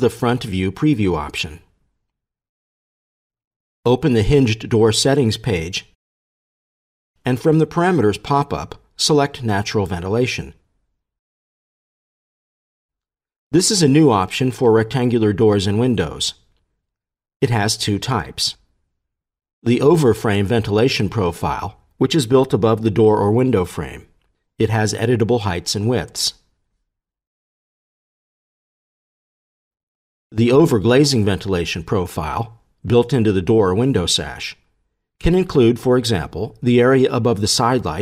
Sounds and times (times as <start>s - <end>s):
Speech: 0.0s - 1.7s, 3.9s - 6.0s, 7.2s - 10.6s, 13.5s - 16.4s, 17.4s - 18.6s, 19.6s - 26.4s, 30.4s - 34.6s, 35.2s - 38.0s.